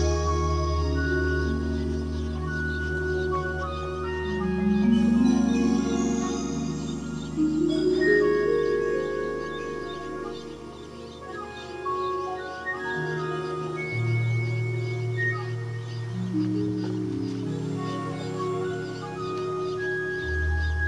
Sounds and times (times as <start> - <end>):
Music: 0.0 - 20.8.